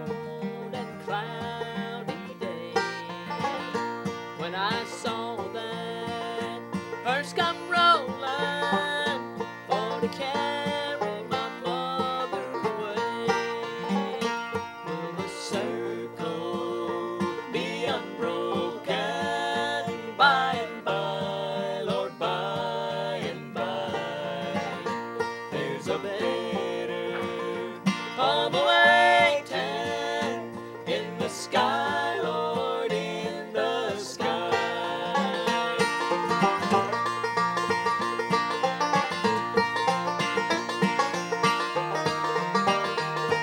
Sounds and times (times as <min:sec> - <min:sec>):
Male singing: 0:00.0 - 0:03.0, 0:04.4 - 0:24.9, 0:25.6 - 0:36.1
Music: 0:00.0 - 0:43.4
Female singing: 0:00.6 - 0:03.0, 0:04.4 - 0:09.2, 0:09.8 - 0:14.2, 0:28.2 - 0:35.4.